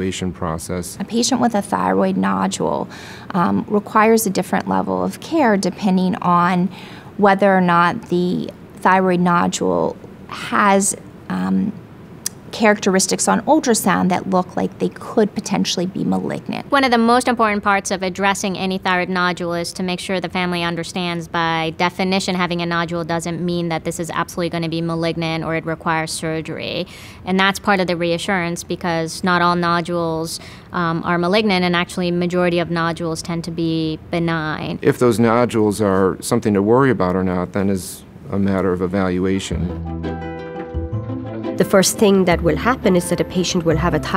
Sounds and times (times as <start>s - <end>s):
Speech: 0.0s - 11.8s, 12.6s - 39.8s, 41.6s - 44.1s.